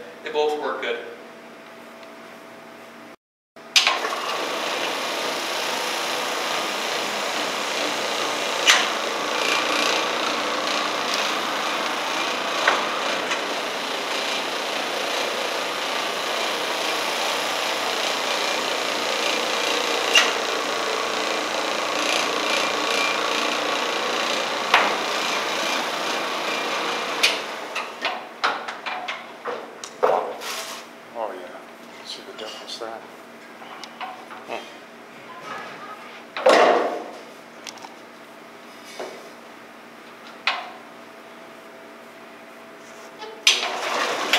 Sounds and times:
Vacuum cleaner: 3.8 - 28.1, 42.8 - 44.3.

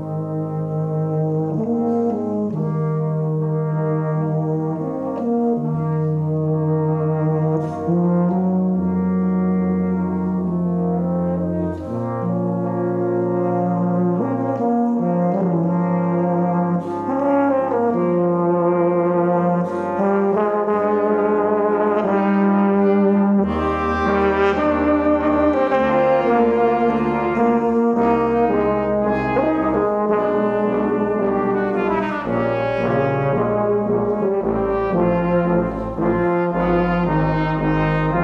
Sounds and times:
Orchestra: 0.0 - 38.2
Trombone: 0.0 - 38.2
Trumpet: 0.0 - 38.2.

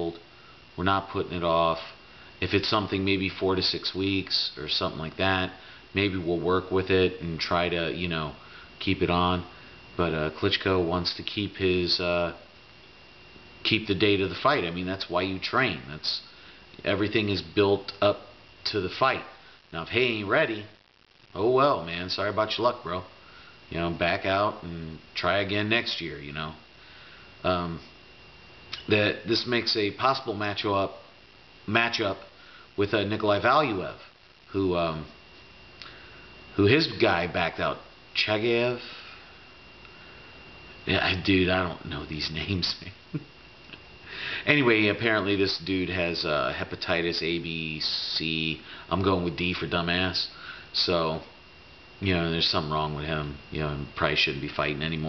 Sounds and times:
Speech: 0.0 - 12.5, 13.6 - 26.6, 27.4 - 27.9, 28.8 - 31.1, 31.7 - 35.2, 36.6 - 39.0, 40.9 - 43.0, 44.4 - 51.3, 52.0 - 55.0
Inside, small room: 0.0 - 55.0.

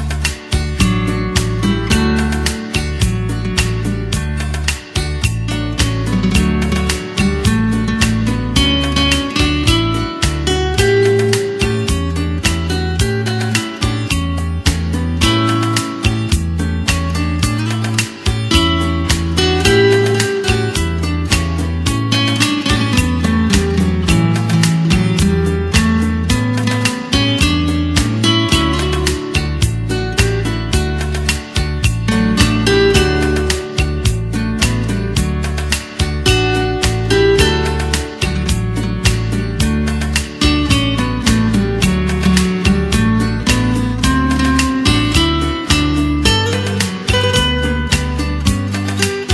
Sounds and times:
Acoustic guitar: 0.0 - 49.3.

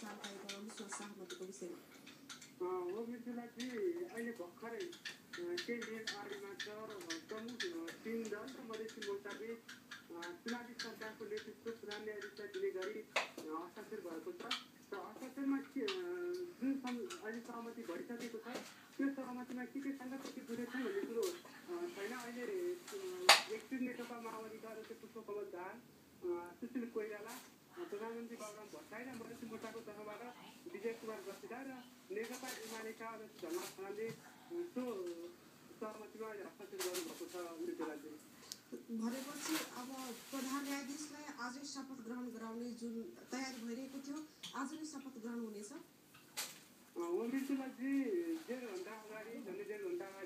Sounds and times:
Speech: 0.0 - 1.8, 2.6 - 38.2, 38.8 - 45.9, 47.0 - 50.2.

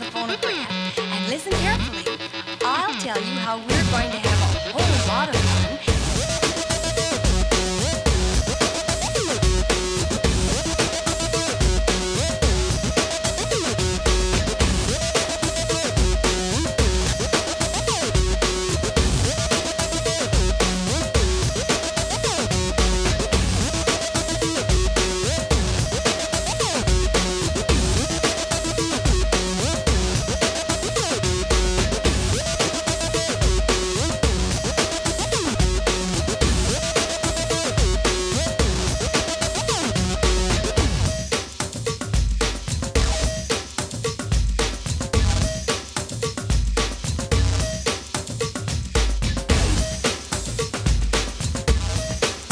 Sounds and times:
Music: 0.0 - 52.5.

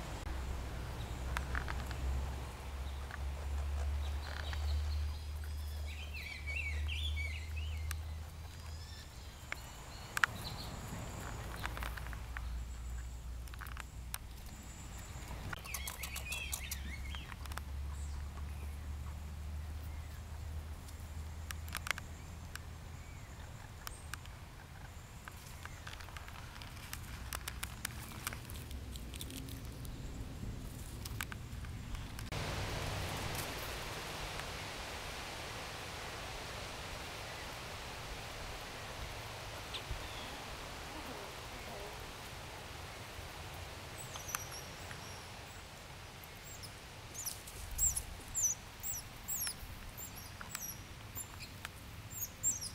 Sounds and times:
Chirp, tweet: 4.0 - 11.7, 14.7 - 18.8, 46.5 - 52.7.

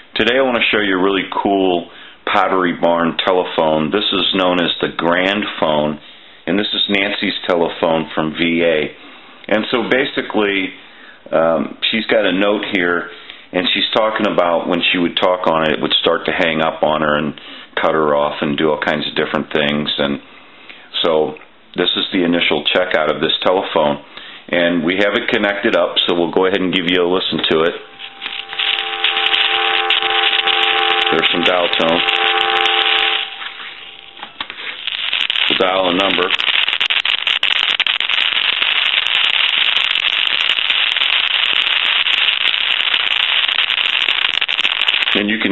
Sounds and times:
Speech: 0.2 - 20.2, 20.9 - 27.8, 31.1 - 32.1, 35.5 - 36.4, 45.2 - 45.5.

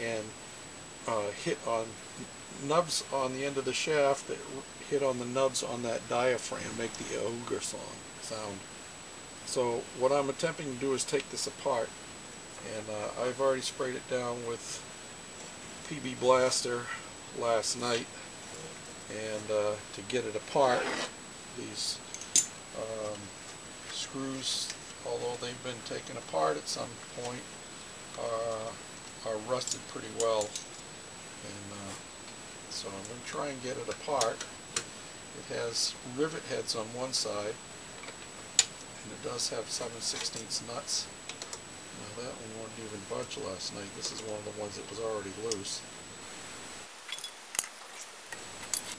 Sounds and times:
Speech: 0.0 - 0.4, 1.0 - 8.6, 9.5 - 11.9, 12.6 - 14.9, 15.8 - 22.0, 22.8 - 23.3, 23.9 - 27.5, 28.2 - 30.6, 31.4 - 32.0, 32.7 - 34.5, 35.4 - 37.6, 39.0 - 41.1, 42.0 - 45.9.

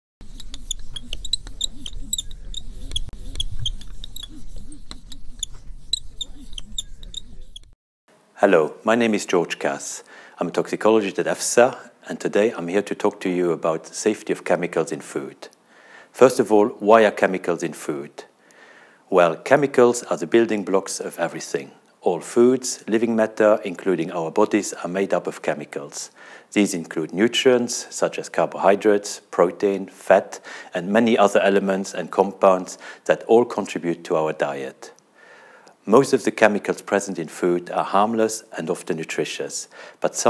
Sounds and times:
Speech: 8.4 - 15.5, 16.2 - 18.3, 19.1 - 35.0, 35.8 - 40.2.

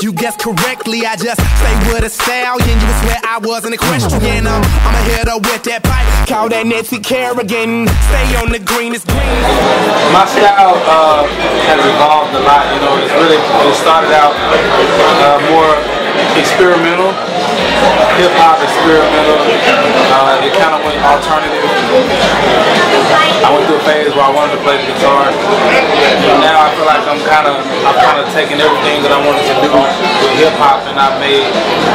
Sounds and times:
Speech: 10.1 - 17.2, 17.8 - 31.9.

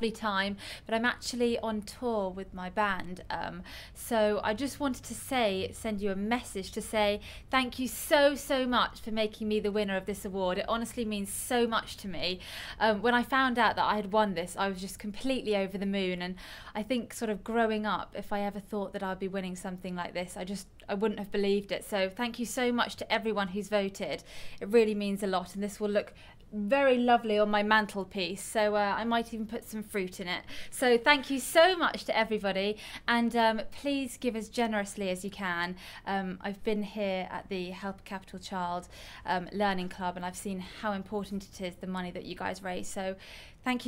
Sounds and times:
Female speech, woman speaking: 0.0 - 43.8
Narration, monologue: 0.0 - 43.8.

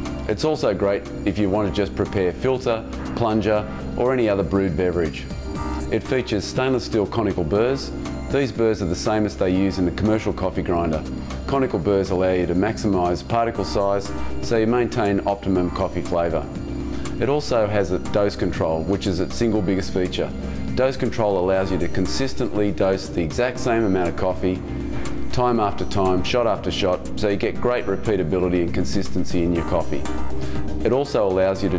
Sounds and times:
Music: 0.0 - 31.7
Speech: 0.3 - 5.3, 5.9 - 16.5, 17.2 - 24.6, 25.3 - 30.1, 30.8 - 31.7.

